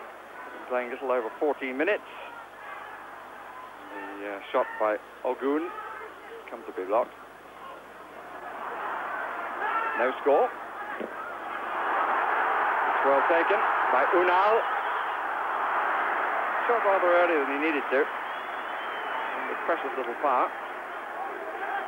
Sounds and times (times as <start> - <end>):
Speech: 19.3 - 20.5.